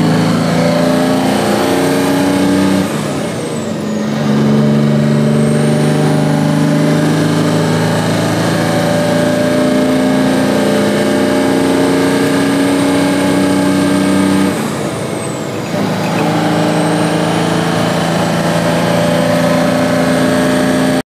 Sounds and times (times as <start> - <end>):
Car: 0.0 - 21.0.